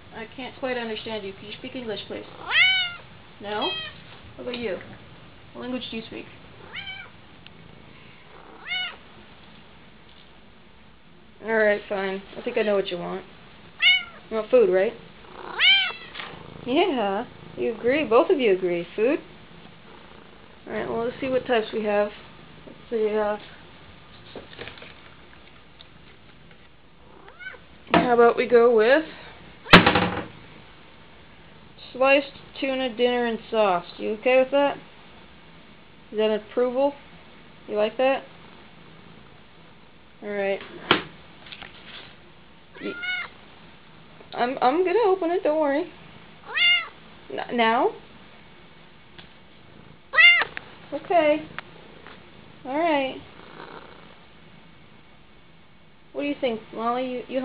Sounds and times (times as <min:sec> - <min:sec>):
Speech: 0:00.1 - 0:02.3, 0:03.4 - 0:03.8, 0:04.4 - 0:04.9, 0:05.6 - 0:06.3, 0:11.4 - 0:13.3, 0:14.3 - 0:15.0, 0:16.7 - 0:19.3, 0:20.7 - 0:22.2, 0:28.0 - 0:29.3, 0:31.8 - 0:34.8, 0:36.2 - 0:37.0, 0:37.7 - 0:38.3, 0:40.2 - 0:40.7, 0:44.4 - 0:46.0, 0:47.3 - 0:48.0, 0:50.9 - 0:51.5, 0:52.6 - 0:53.2, 0:56.2 - 0:57.4
Caterwaul: 0:02.4 - 0:03.0, 0:06.7 - 0:07.1, 0:08.5 - 0:09.0, 0:13.8 - 0:14.2, 0:15.4 - 0:16.2, 0:27.2 - 0:27.6, 0:42.8 - 0:43.3, 0:46.5 - 0:47.0, 0:50.1 - 0:50.5
Meow: 0:02.4 - 0:03.0, 0:03.7 - 0:04.0, 0:06.7 - 0:07.1, 0:08.6 - 0:09.0, 0:13.8 - 0:14.2, 0:15.5 - 0:16.2, 0:27.2 - 0:27.6, 0:42.8 - 0:43.3, 0:46.5 - 0:47.0, 0:50.1 - 0:50.5.